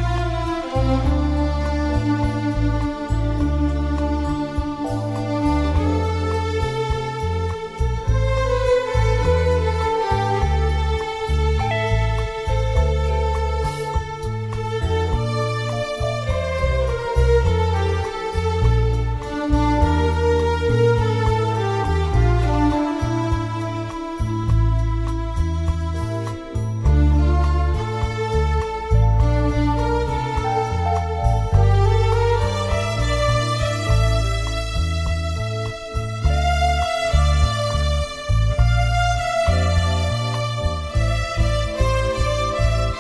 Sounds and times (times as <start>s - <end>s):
Music: 0.0s - 43.0s.